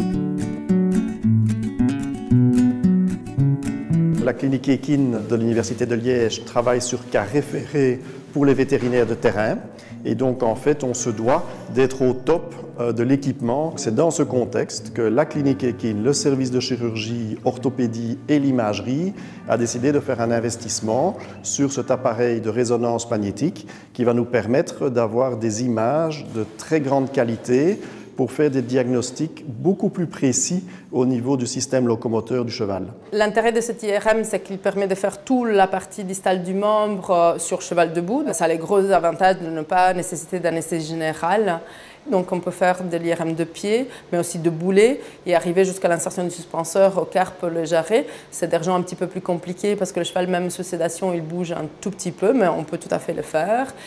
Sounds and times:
Speech: 4.2 - 53.8.

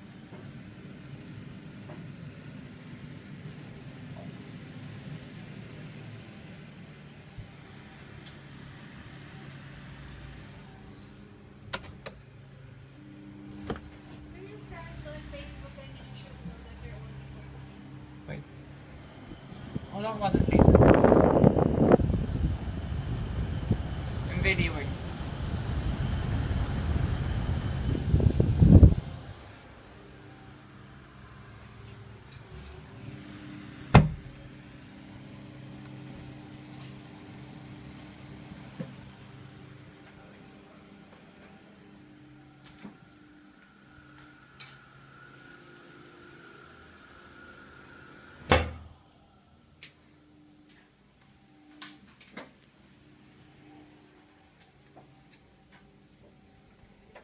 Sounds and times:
Mechanical fan: 0.0 - 57.2.

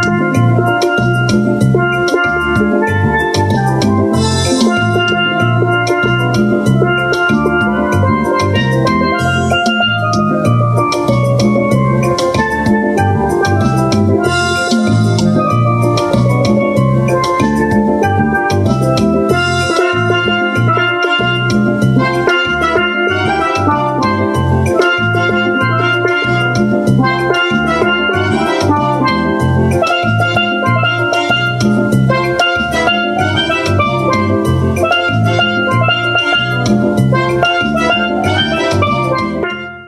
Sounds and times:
Steelpan: 0.0 - 39.8.

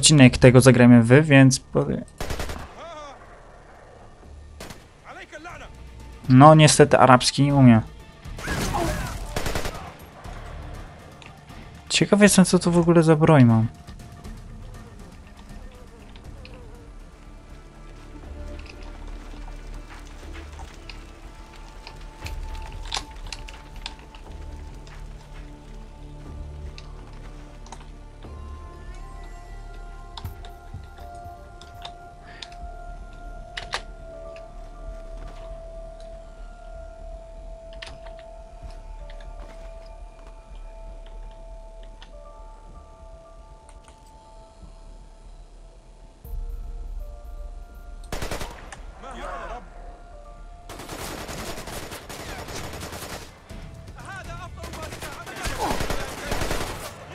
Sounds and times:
Music: 0.0 - 57.1
Speech: 5.1 - 5.7, 6.3 - 7.9, 11.9 - 13.7, 54.0 - 56.4.

